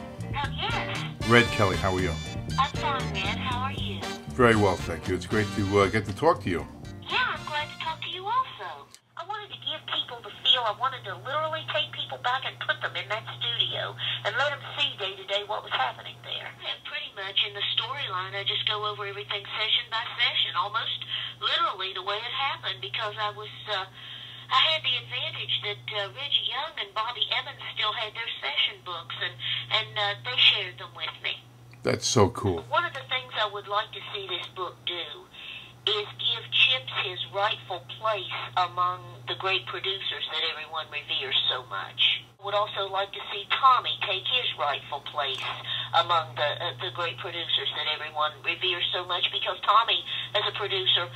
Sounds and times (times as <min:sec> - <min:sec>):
Speech: 0:00.4 - 0:23.9, 0:24.5 - 0:35.3, 0:35.9 - 0:51.1.